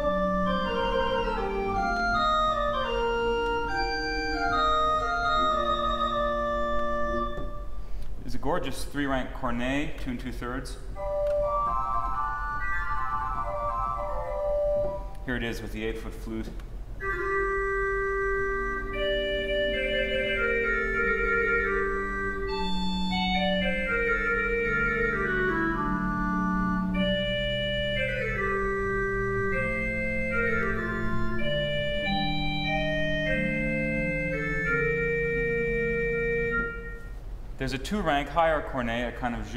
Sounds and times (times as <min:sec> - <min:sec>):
Classical music: 0:00.0 - 0:08.0, 0:11.0 - 0:15.6, 0:17.0 - 0:37.5
Piano: 0:00.0 - 0:08.1, 0:11.0 - 0:15.5, 0:17.0 - 0:37.4
Organ: 0:00.0 - 0:09.2, 0:10.0 - 0:39.5
Speech: 0:08.2 - 0:10.9, 0:15.3 - 0:16.6, 0:37.6 - 0:39.5.